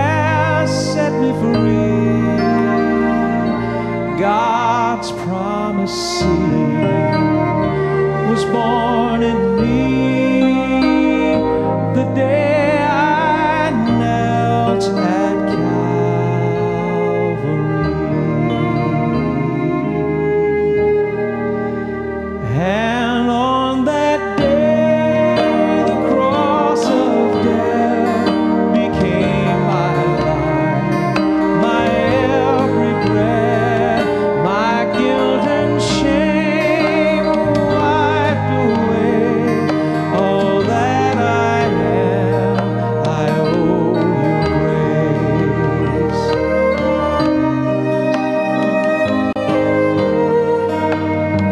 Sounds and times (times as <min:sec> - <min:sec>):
Violin, fiddle: 0:00.0 - 0:51.5.